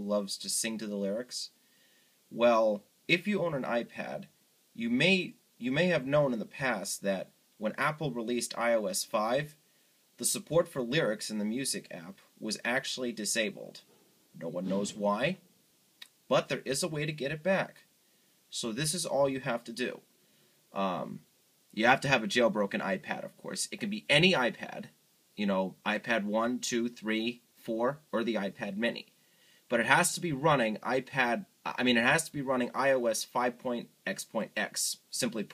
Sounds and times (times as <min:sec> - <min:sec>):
Speech: 0:00.0 - 0:01.6, 0:02.3 - 0:09.6, 0:10.2 - 0:15.4, 0:16.0 - 0:17.9, 0:18.5 - 0:20.1, 0:20.8 - 0:29.1, 0:29.7 - 0:35.5.